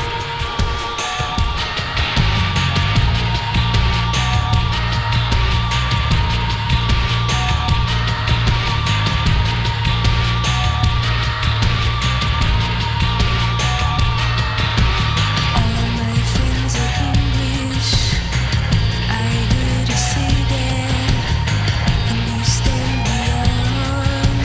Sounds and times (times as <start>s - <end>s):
Music: 0.0s - 24.4s.